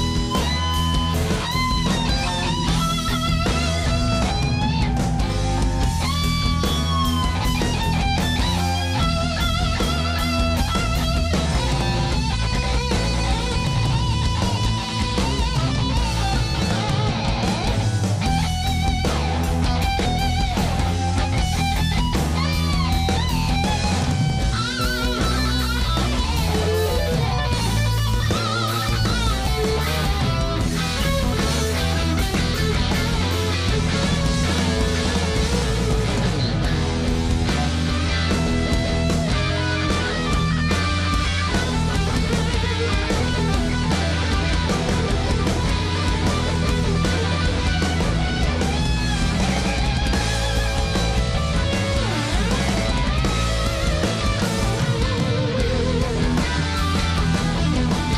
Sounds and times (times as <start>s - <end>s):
Music: 0.0s - 58.1s.